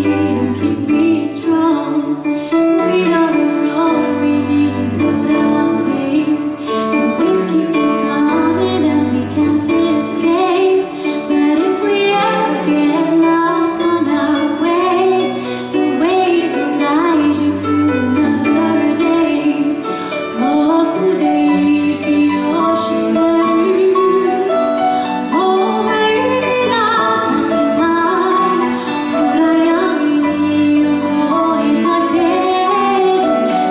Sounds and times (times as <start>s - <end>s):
Music: 0.0s - 33.7s.